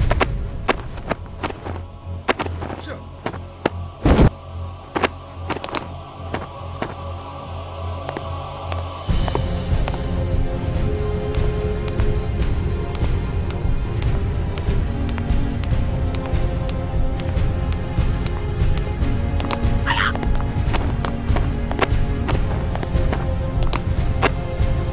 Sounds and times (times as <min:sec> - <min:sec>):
Music: 0:00.0 - 0:24.9.